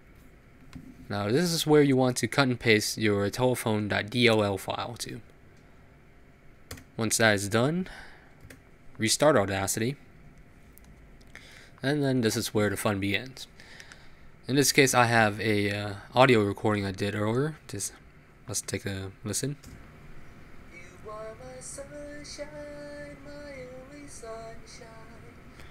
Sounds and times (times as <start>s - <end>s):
Speech: 1.1s - 5.3s, 7.0s - 8.0s, 9.0s - 10.0s, 11.8s - 13.5s, 14.5s - 19.6s.